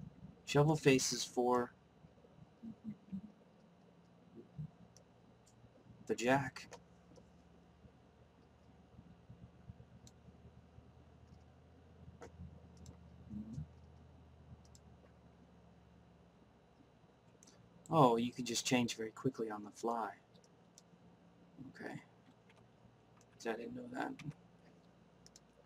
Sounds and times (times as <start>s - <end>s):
Clicking: 4.9s - 5.6s, 8.4s - 10.2s, 11.2s - 11.5s, 12.2s - 14.0s, 14.6s - 15.2s, 17.3s - 17.6s, 20.3s - 20.9s, 22.2s - 23.4s, 24.2s - 25.6s.